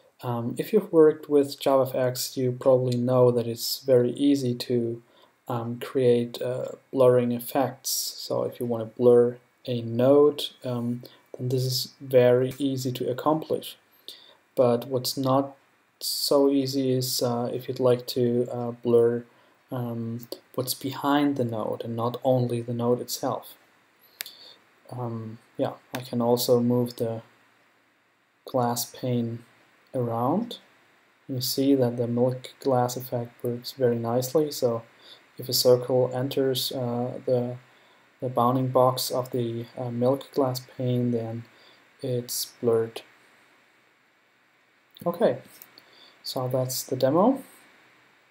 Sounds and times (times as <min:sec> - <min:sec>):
Speech: 0:00.2 - 0:13.8, 0:14.6 - 0:23.6, 0:24.9 - 0:27.3, 0:28.5 - 0:30.7, 0:31.3 - 0:37.6, 0:38.2 - 0:43.1, 0:45.0 - 0:45.6, 0:46.2 - 0:47.6.